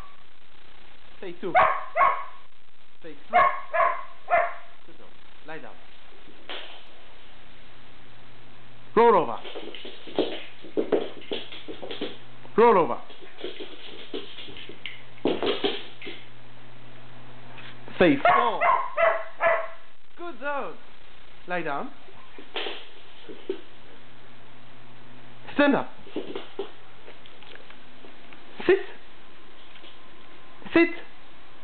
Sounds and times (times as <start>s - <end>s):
Speech: 1.2s - 1.6s, 4.9s - 5.8s, 9.0s - 9.5s, 12.6s - 13.1s, 17.9s - 18.7s, 20.2s - 20.8s, 21.5s - 22.0s, 25.5s - 26.0s
Bark: 1.5s - 2.4s, 3.3s - 4.8s, 18.2s - 19.9s.